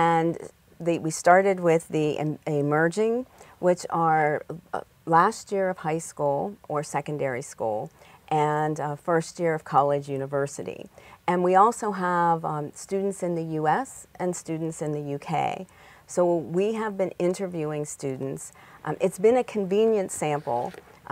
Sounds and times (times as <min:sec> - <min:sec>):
Speech: 0:00.0 - 0:21.1.